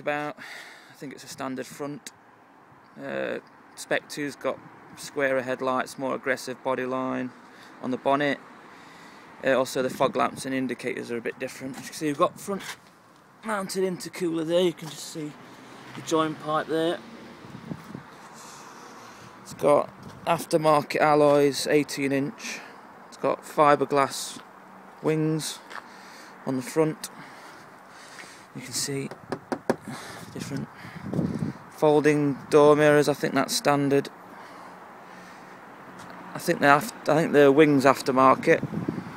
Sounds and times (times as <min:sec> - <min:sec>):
Speech: 0:00.0 - 0:00.4, 0:01.0 - 0:02.1, 0:03.0 - 0:08.4, 0:09.4 - 0:12.8, 0:13.4 - 0:15.4, 0:16.0 - 0:17.0, 0:19.5 - 0:24.4, 0:25.0 - 0:25.7, 0:26.5 - 0:27.2, 0:28.6 - 0:29.2, 0:30.4 - 0:30.7, 0:31.8 - 0:34.1, 0:36.4 - 0:38.6.